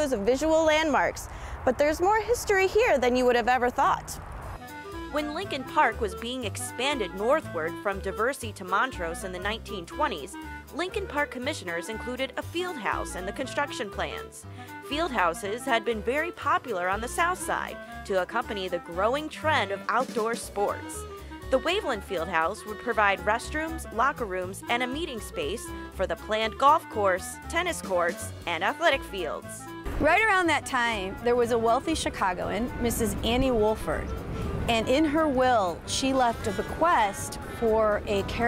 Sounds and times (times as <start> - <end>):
Speech: 0.0 - 4.2, 5.1 - 34.1, 34.7 - 38.4
Music: 0.0 - 38.4.